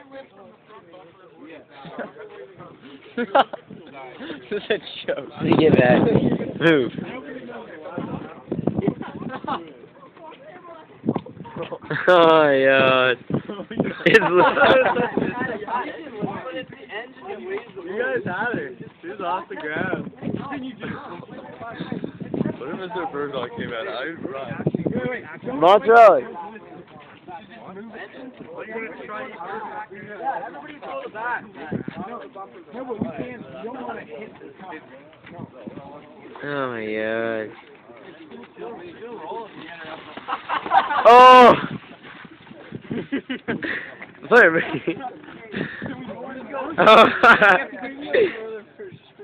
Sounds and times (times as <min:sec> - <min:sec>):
Speech: 0:14.2 - 0:40.1.